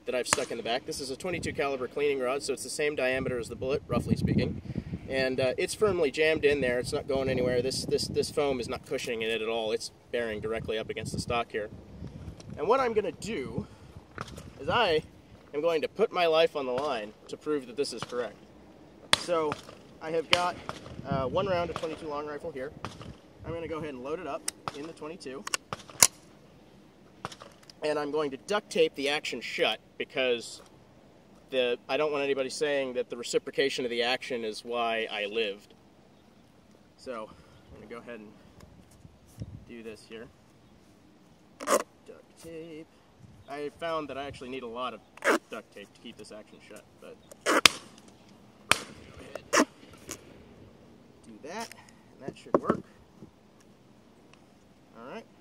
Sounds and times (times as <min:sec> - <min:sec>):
Speech: 0:00.0 - 0:11.7, 0:12.6 - 0:13.7, 0:14.6 - 0:18.4, 0:19.2 - 0:22.8, 0:23.4 - 0:25.5, 0:27.8 - 0:30.7, 0:31.5 - 0:35.7, 0:37.0 - 0:38.4, 0:39.7 - 0:40.3, 0:42.0 - 0:42.9, 0:43.5 - 0:47.2, 0:51.2 - 0:52.8, 0:54.9 - 0:55.3.